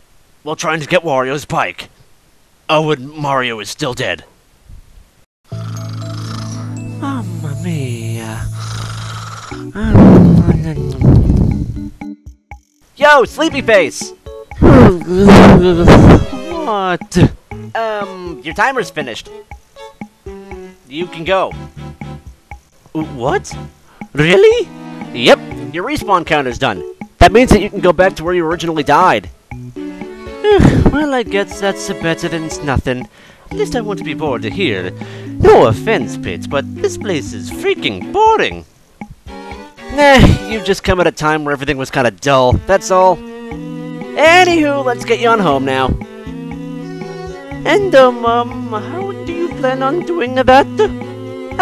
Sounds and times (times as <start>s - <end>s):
Speech: 0.5s - 1.9s, 2.7s - 4.3s, 7.0s - 8.5s, 9.8s - 11.0s, 13.0s - 19.3s, 20.9s - 21.6s, 23.0s - 23.6s, 24.2s - 29.3s, 30.5s - 38.6s, 39.9s - 43.2s, 44.2s - 46.0s, 47.6s - 50.9s
Music: 5.5s - 51.6s.